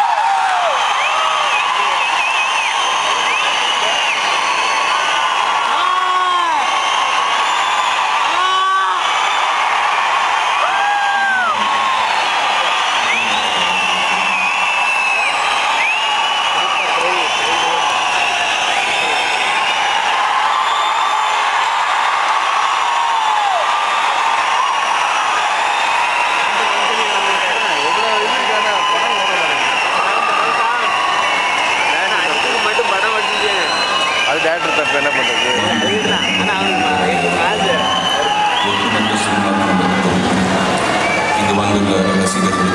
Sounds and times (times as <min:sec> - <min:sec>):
Speech: 0:34.3 - 0:38.0, 0:38.6 - 0:40.6, 0:41.4 - 0:42.7.